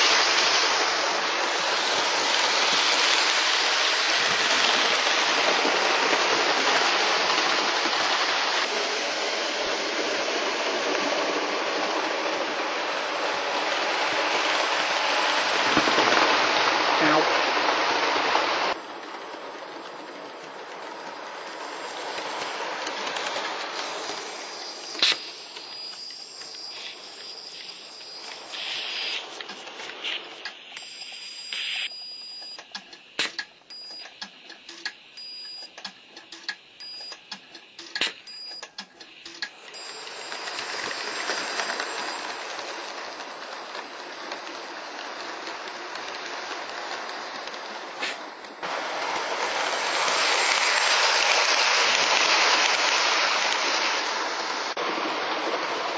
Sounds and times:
Train: 0:00.0 - 0:55.9.

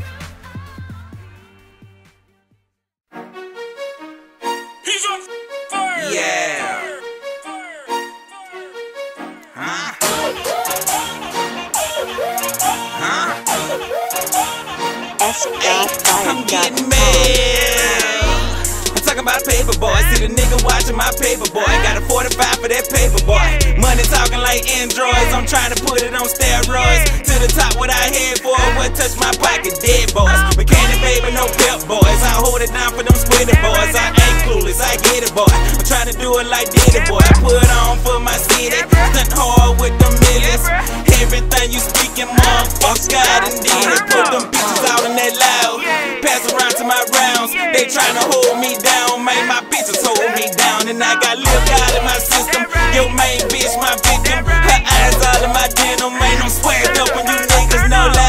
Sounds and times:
Pop music: 0:00.0 - 0:02.3, 0:04.4 - 0:58.2
Exciting music: 0:03.1 - 0:58.2.

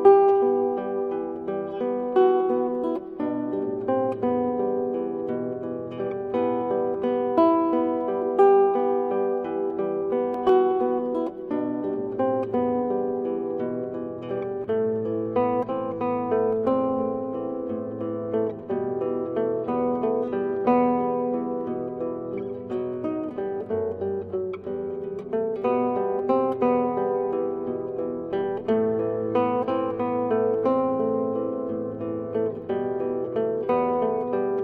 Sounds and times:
Strum: 0:00.0 - 0:34.6.

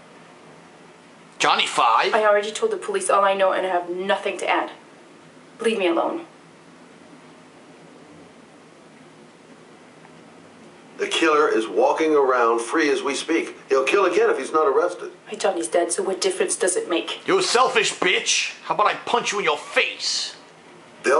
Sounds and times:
Speech: 0:01.4 - 0:04.8, 0:11.0 - 0:20.4.

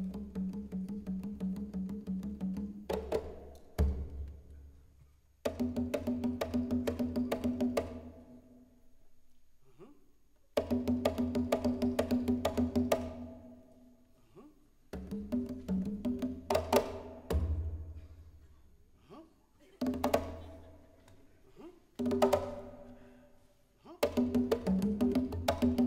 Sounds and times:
Percussion: 0:00.0 - 0:08.9, 0:10.5 - 0:14.0, 0:14.9 - 0:23.1, 0:24.0 - 0:25.8.

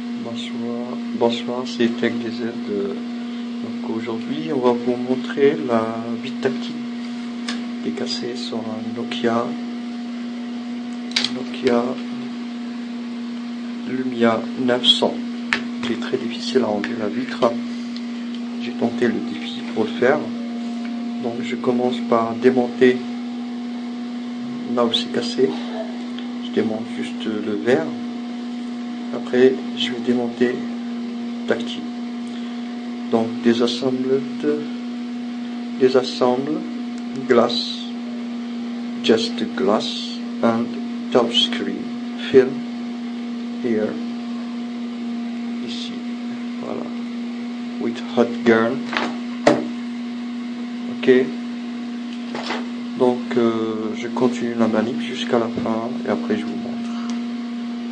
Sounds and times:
Speech: 0:00.2 - 0:06.8, 0:07.8 - 0:09.7, 0:11.2 - 0:12.2, 0:13.8 - 0:17.6, 0:18.6 - 0:20.5, 0:21.2 - 0:23.2, 0:24.6 - 0:28.1, 0:29.1 - 0:30.7, 0:31.4 - 0:32.0, 0:33.1 - 0:34.8, 0:35.8 - 0:38.3, 0:39.0 - 0:42.7, 0:43.6 - 0:44.1, 0:45.6 - 0:47.1, 0:47.8 - 0:48.9, 0:50.9 - 0:51.4, 0:53.0 - 0:57.0.

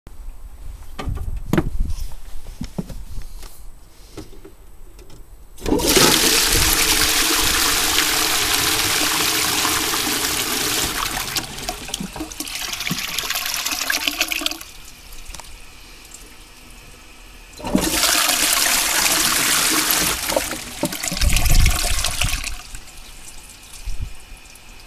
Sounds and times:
Toilet flush: 0:05.6 - 0:15.0, 0:15.6 - 0:24.8.

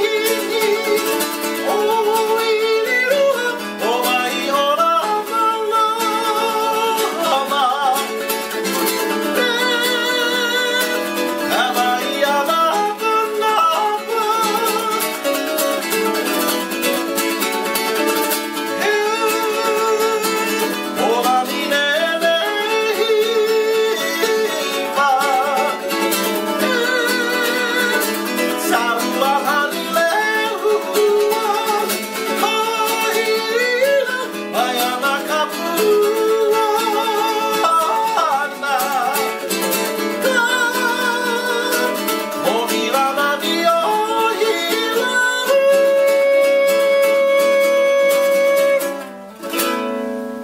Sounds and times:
Guitar: 0:00.0 - 0:50.4
Ukulele: 0:00.0 - 0:50.4.

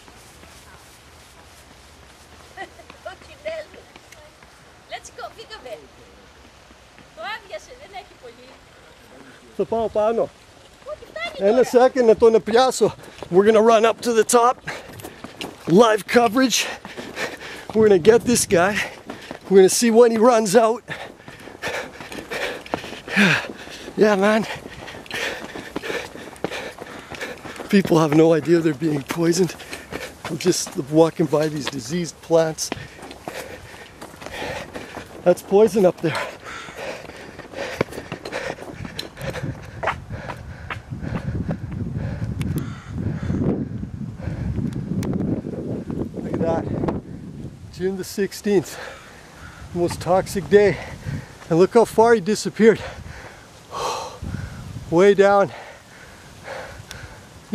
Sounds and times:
Outside, rural or natural: 0:00.0 - 0:57.5.

